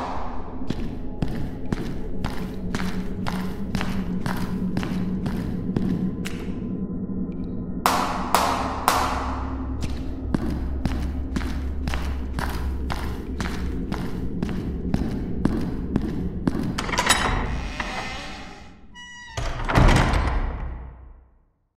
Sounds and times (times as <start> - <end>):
Echo: 0.0 - 17.3.